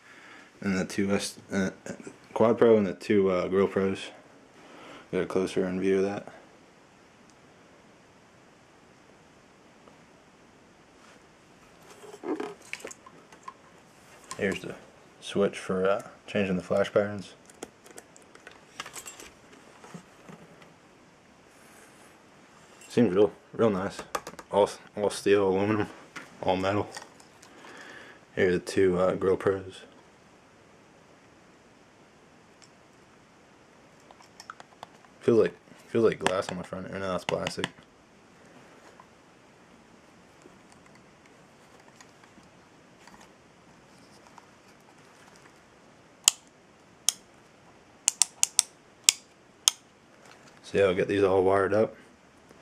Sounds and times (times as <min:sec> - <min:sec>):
Speech: 0:00.6 - 0:04.2, 0:05.1 - 0:06.4, 0:14.4 - 0:17.4, 0:22.9 - 0:27.0, 0:28.4 - 0:29.9, 0:35.2 - 0:37.8, 0:50.6 - 0:52.0.